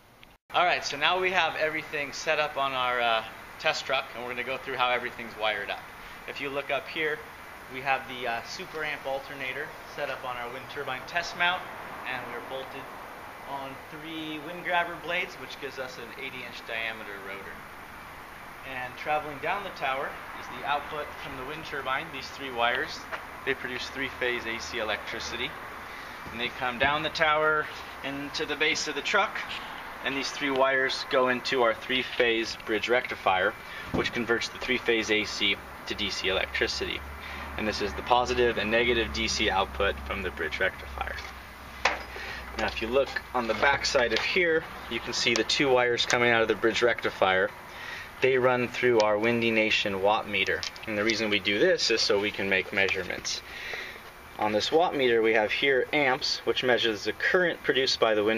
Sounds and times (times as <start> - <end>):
Speech: 0.5 - 12.9, 13.5 - 17.6, 18.6 - 25.6, 26.3 - 37.0, 37.6 - 41.3, 42.6 - 47.6, 48.2 - 53.5, 54.4 - 58.3.